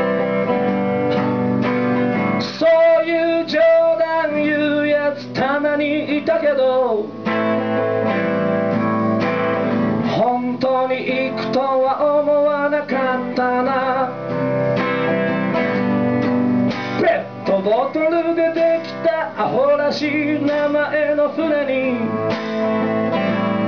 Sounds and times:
Acoustic guitar: 0.0 - 23.6
Electric guitar: 0.0 - 23.6
Strum: 0.0 - 23.6.

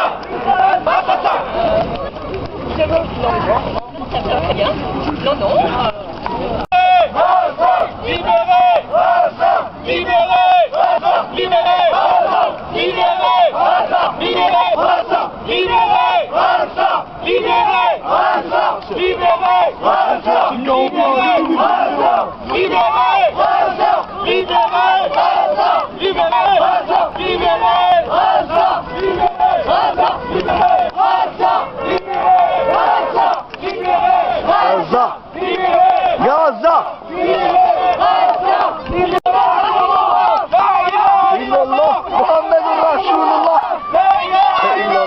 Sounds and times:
Speech: 1.6 - 7.0, 20.2 - 23.2, 34.5 - 35.2, 36.2 - 37.0, 40.8 - 45.0.

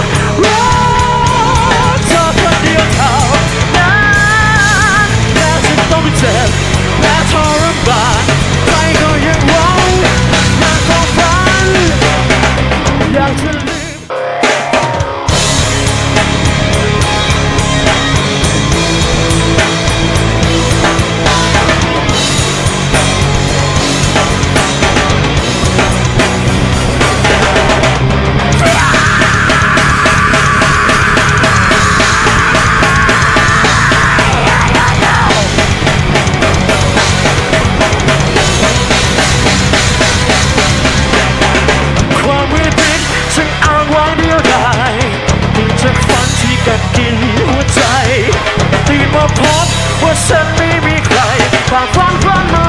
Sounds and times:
Music: 0.0 - 52.6.

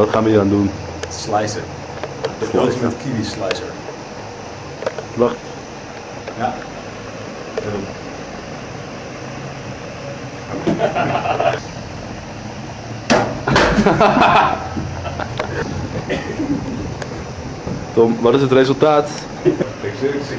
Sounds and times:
Mechanical fan: 0.0 - 20.3.

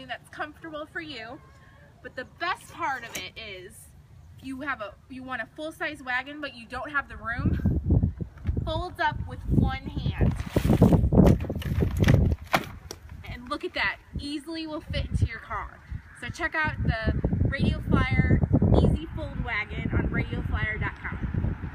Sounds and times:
Speech: 0.0 - 1.4, 2.0 - 7.7, 8.7 - 10.4, 13.2 - 21.3.

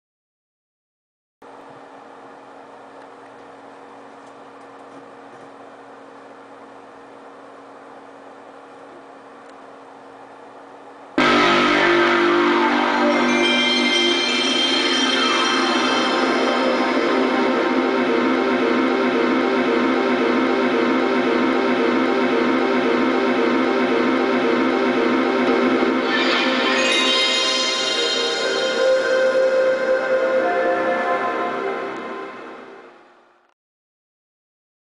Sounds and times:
Sound effect: 11.2 - 33.0
Music: 11.2 - 33.1.

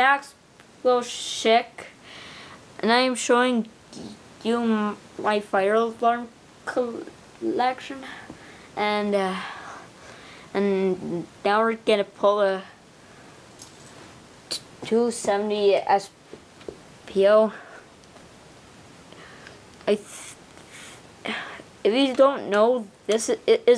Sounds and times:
Speech: 0.0 - 2.0, 2.8 - 9.5, 10.6 - 12.8, 14.5 - 16.2, 17.1 - 17.7, 19.9 - 20.4, 21.3 - 23.7.

